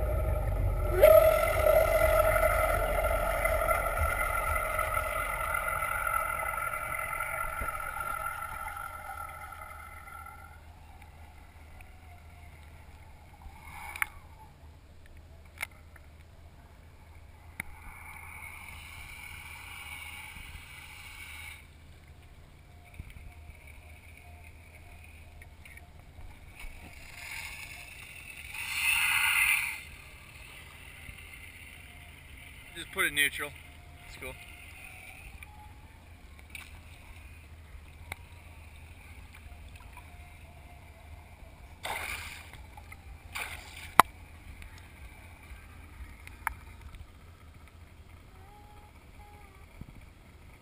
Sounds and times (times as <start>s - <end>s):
Motorboat, speedboat: 0.0s - 14.6s, 16.8s - 50.6s.